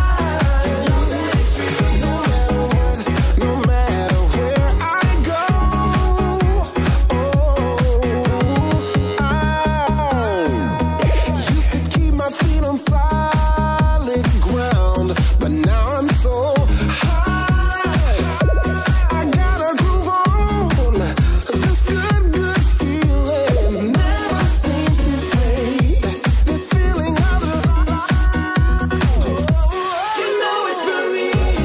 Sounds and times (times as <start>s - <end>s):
Funk: 0.0s - 30.0s, 30.8s - 31.6s
Rhythm and blues: 0.0s - 31.6s.